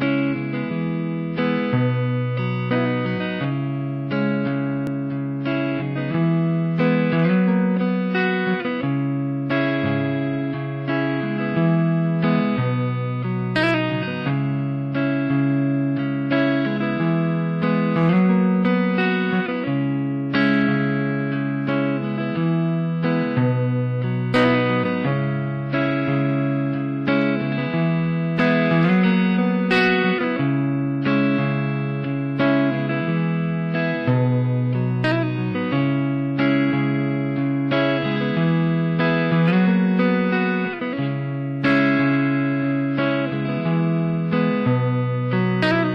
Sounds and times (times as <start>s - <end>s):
Guitar: 0.0s - 45.9s.